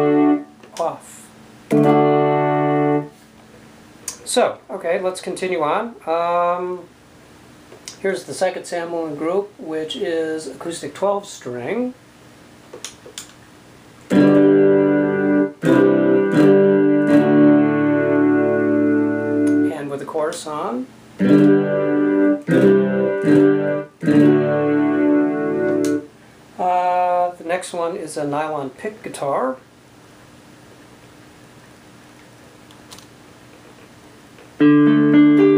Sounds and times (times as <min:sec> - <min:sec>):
Guitar: 0:00.0 - 0:04.4, 0:14.0 - 0:27.4, 0:32.9 - 0:35.5
Speech: 0:00.7 - 0:01.4, 0:04.2 - 0:06.9, 0:08.0 - 0:12.0, 0:19.7 - 0:20.9, 0:26.6 - 0:29.7.